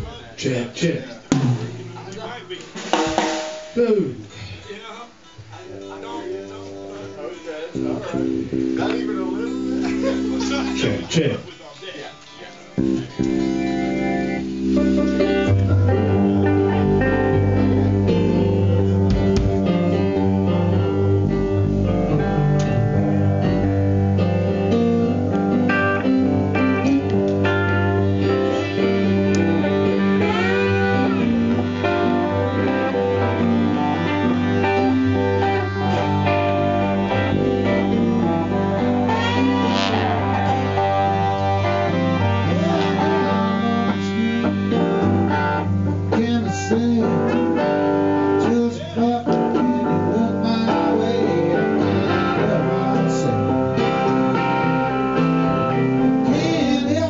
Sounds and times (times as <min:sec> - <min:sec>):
Speech: 0:00.0 - 0:02.9, 0:03.7 - 0:12.8, 0:48.5 - 0:49.8
Music: 0:00.0 - 0:57.1.